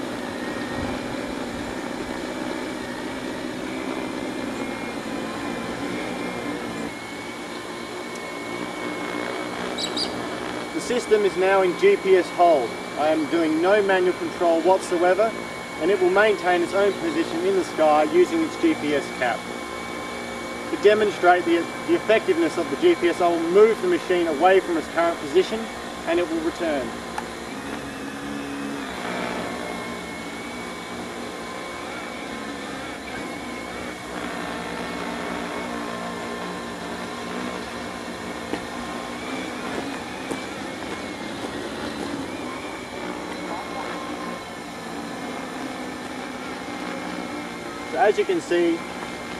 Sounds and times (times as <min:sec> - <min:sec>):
Speech: 0:10.8 - 0:19.4, 0:20.7 - 0:26.9, 0:47.9 - 0:48.8.